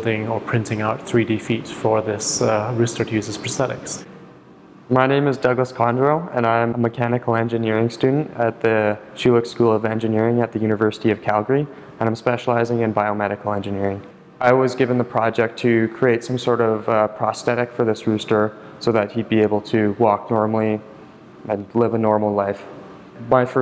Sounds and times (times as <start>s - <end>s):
Speech: 0.0s - 4.1s, 4.9s - 23.6s.